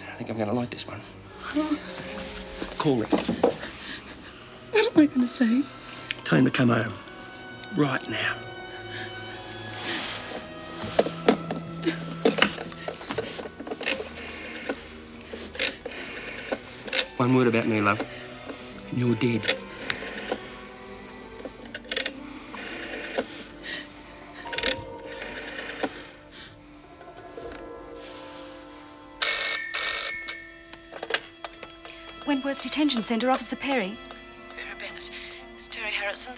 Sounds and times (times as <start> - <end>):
Music: 0.0 - 36.3.